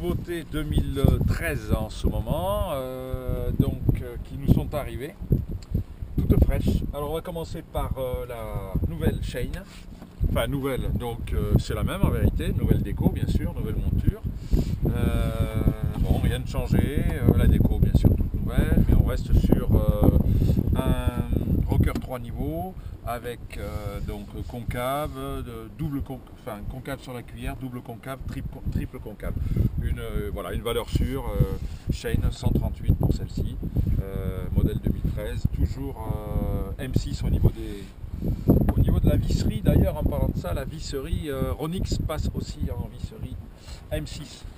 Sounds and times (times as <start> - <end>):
Speech: 0.0 - 5.2, 6.2 - 9.8, 10.4 - 14.2, 14.9 - 20.2, 20.8 - 37.9, 38.7 - 44.4.